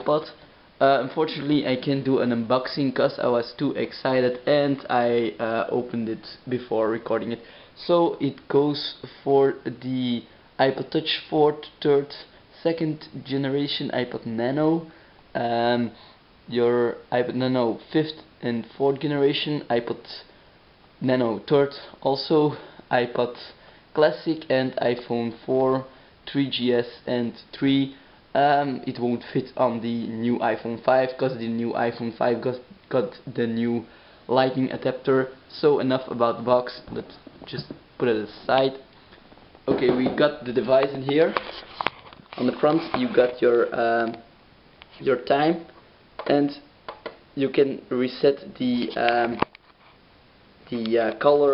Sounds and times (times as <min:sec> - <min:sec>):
Speech: 0:00.0 - 0:20.3, 0:21.0 - 0:38.9, 0:39.7 - 0:41.5, 0:42.4 - 0:44.3, 0:45.0 - 0:46.7, 0:47.4 - 0:49.5, 0:50.7 - 0:51.5.